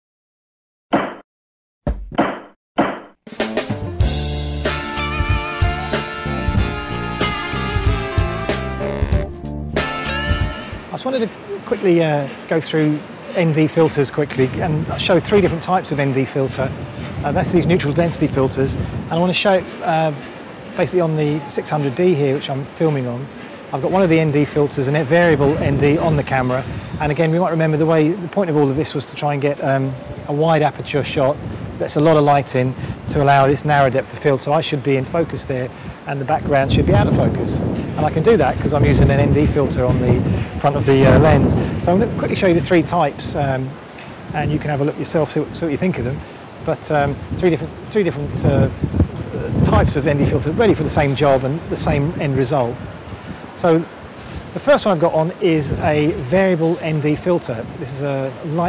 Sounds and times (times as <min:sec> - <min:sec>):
Music: 0:03.3 - 0:10.8.